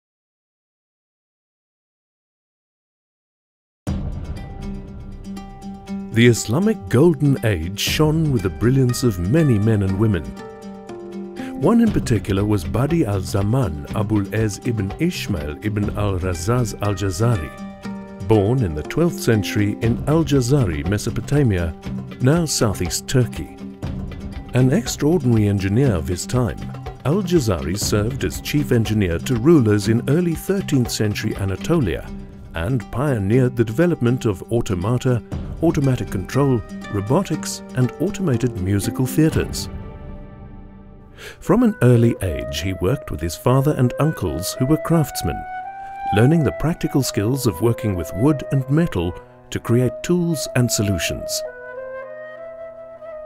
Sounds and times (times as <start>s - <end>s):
Music: 3.9s - 53.2s
Speech: 6.2s - 10.4s, 11.4s - 17.6s, 18.3s - 23.6s, 24.6s - 39.7s, 41.4s - 45.4s, 46.1s - 51.5s.